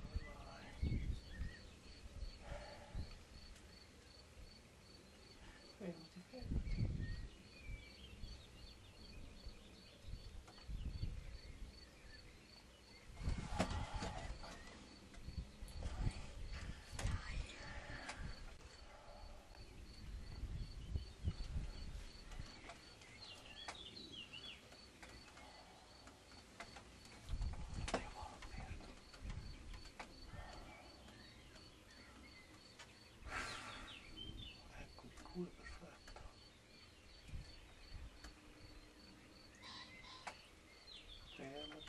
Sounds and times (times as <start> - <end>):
Environmental noise: 0.0 - 41.8.